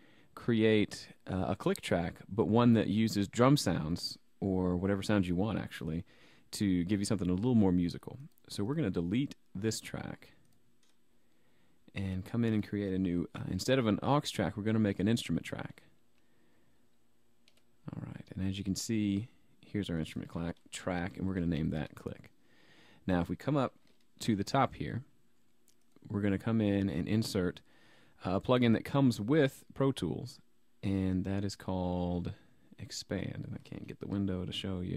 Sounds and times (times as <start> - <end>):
Speech: 0.4 - 10.4, 11.9 - 15.9, 17.8 - 22.3, 23.0 - 25.1, 26.0 - 34.9.